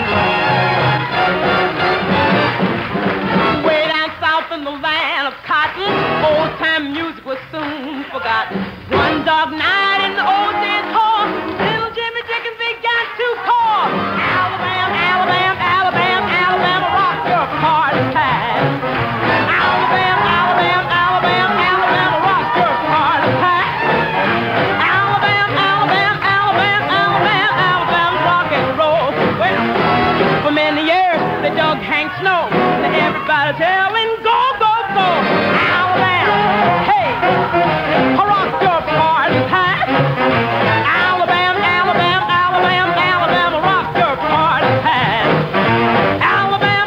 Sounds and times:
Rock and roll: 0.0s - 46.8s.

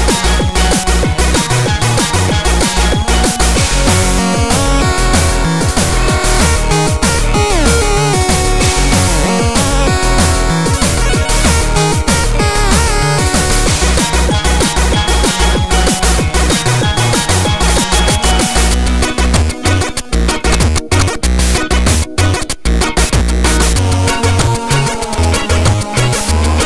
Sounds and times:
Music: 0.0s - 26.6s.

